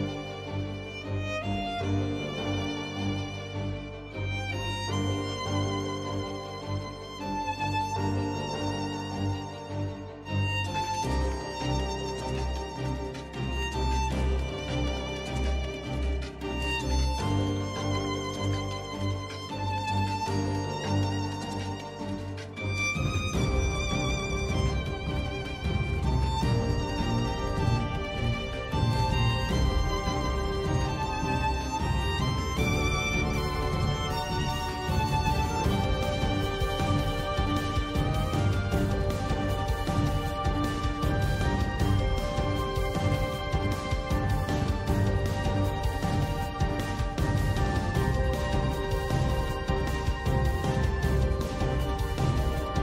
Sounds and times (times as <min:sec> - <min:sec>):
Theme music: 0:00.0 - 0:52.8.